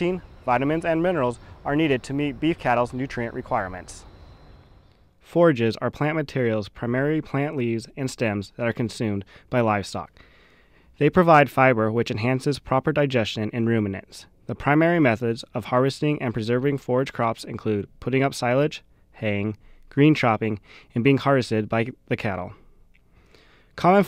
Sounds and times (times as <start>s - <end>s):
Speech: 0.0s - 4.1s, 5.2s - 10.1s, 11.0s - 22.6s, 23.8s - 24.0s.